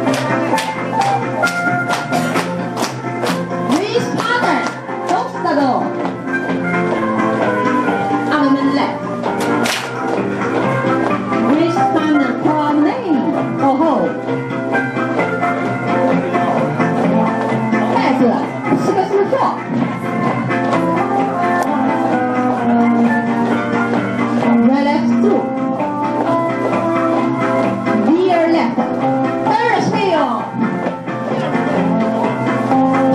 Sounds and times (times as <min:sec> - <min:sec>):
Music: 0:00.0 - 0:33.1.